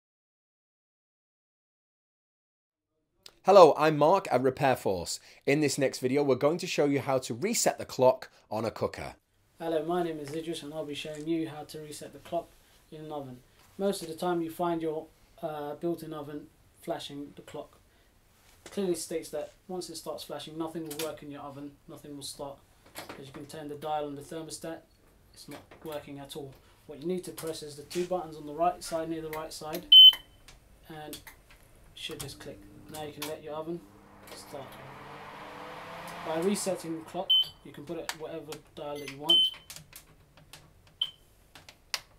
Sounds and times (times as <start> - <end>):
Speech: 3.4 - 17.8, 18.7 - 29.9, 30.9 - 31.3, 32.0 - 33.8, 36.3 - 39.5.